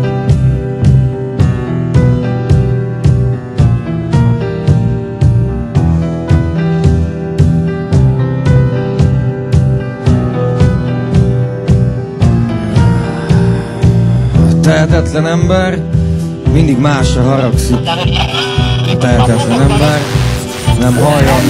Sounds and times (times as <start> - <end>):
Music: 0.0 - 21.4
Speech: 14.6 - 15.8, 16.5 - 21.4.